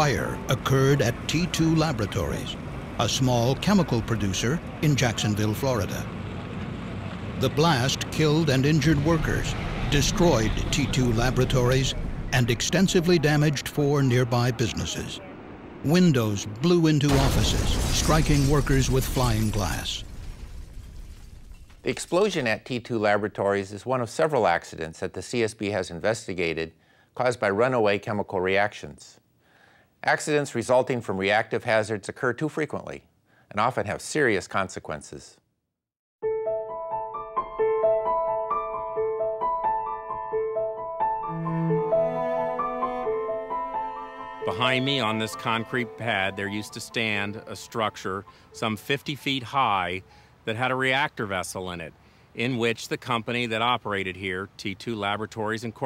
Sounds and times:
Speech: 0.0 - 6.1, 7.4 - 20.0, 21.9 - 29.2, 30.0 - 35.4, 44.5 - 55.8.

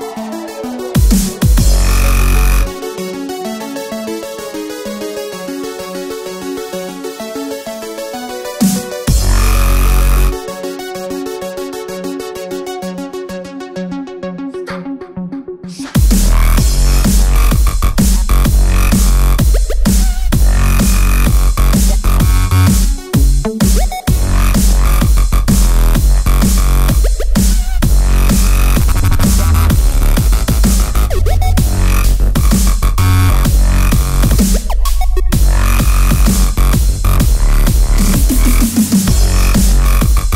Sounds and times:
Music: 0.0 - 40.3.

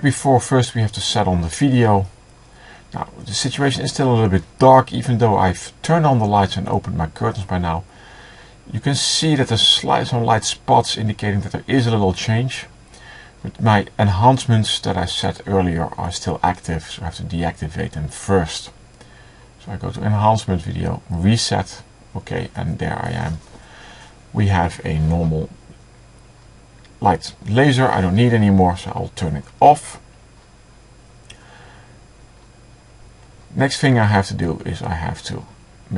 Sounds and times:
Speech: 0.0 - 2.2, 3.0 - 7.9, 8.7 - 12.8, 13.4 - 18.8, 19.6 - 23.5, 24.4 - 25.6, 27.0 - 30.1, 33.5 - 35.9.

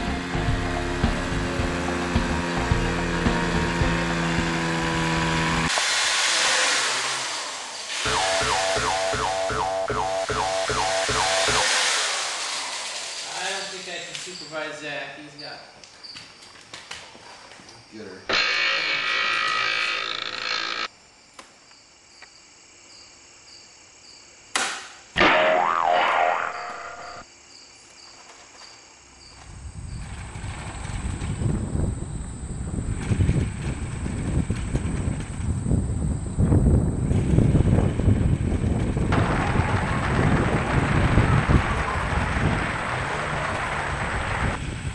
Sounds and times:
Speech: 13.2 - 15.8, 17.9 - 18.3.

